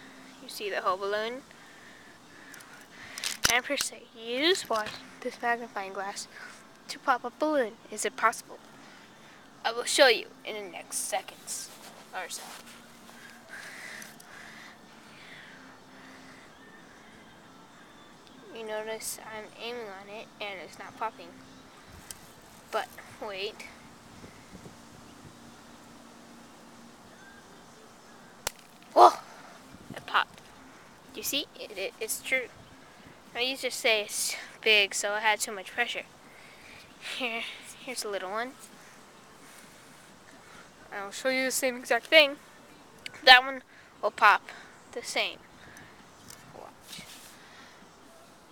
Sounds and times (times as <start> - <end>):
Speech: 9.7 - 12.6, 22.7 - 23.7.